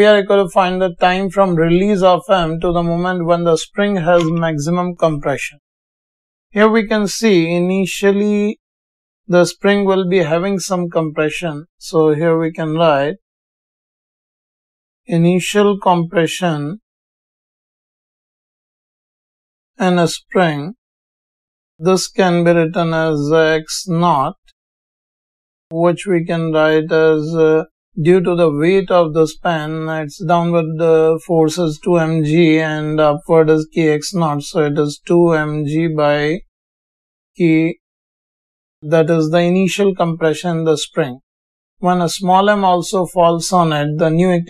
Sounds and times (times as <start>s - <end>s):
Speech: 0.0s - 5.6s, 6.6s - 8.6s, 9.3s - 13.2s, 15.1s - 16.8s, 19.8s - 20.8s, 21.8s - 24.5s, 25.7s - 36.4s, 37.4s - 37.8s, 38.8s - 41.2s, 41.8s - 44.4s.